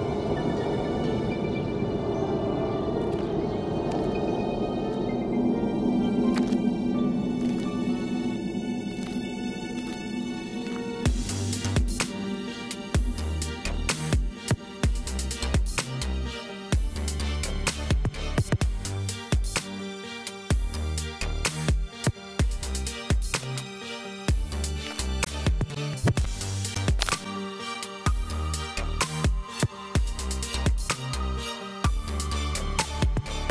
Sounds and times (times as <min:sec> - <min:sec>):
Music: 0:00.0 - 0:33.5.